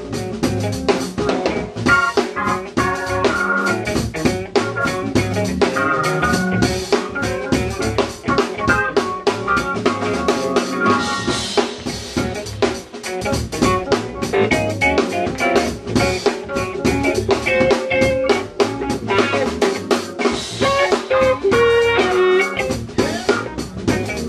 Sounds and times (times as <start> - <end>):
Music: 0.0 - 24.2.